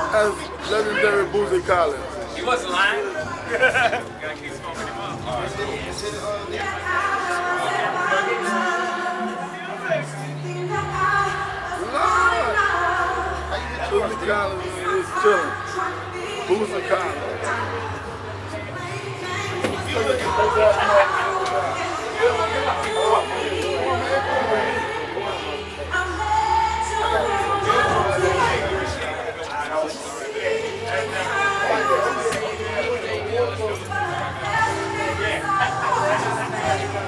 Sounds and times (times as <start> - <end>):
Music: 0.0 - 37.0
Speech: 0.0 - 37.0.